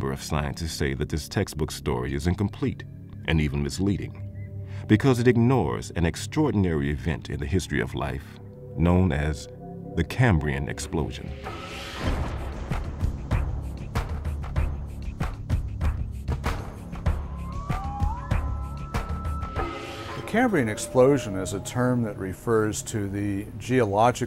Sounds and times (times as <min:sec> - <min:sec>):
Speech: 0:00.0 - 0:04.2, 0:04.9 - 0:11.4, 0:20.3 - 0:24.2
Music: 0:00.0 - 0:24.2.